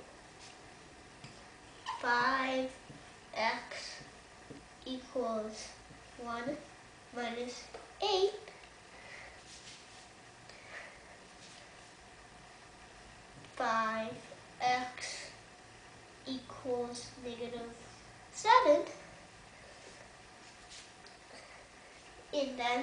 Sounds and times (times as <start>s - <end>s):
Inside, small room: 0.0s - 22.8s
Child speech, kid speaking: 1.9s - 2.8s, 3.4s - 4.0s, 4.8s - 8.5s, 13.6s - 15.4s, 16.2s - 19.1s, 22.3s - 22.8s.